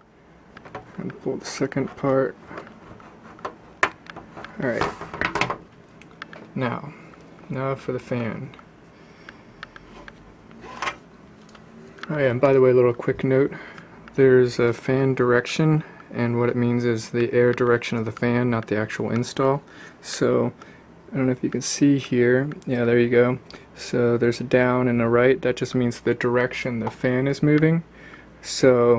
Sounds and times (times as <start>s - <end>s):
Speech: 1.0s - 2.4s, 4.6s - 5.0s, 6.6s - 8.6s, 12.0s - 13.6s, 14.2s - 28.9s.